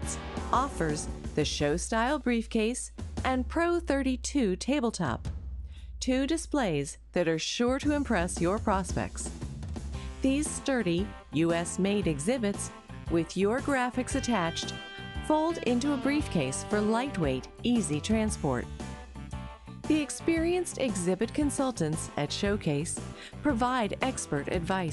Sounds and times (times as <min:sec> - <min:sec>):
Female speech, woman speaking: 0:00.0 - 0:05.2, 0:06.0 - 0:09.3, 0:10.2 - 0:18.7, 0:19.9 - 0:24.9
Music: 0:00.0 - 0:24.9
Narration, monologue: 0:00.0 - 0:24.9.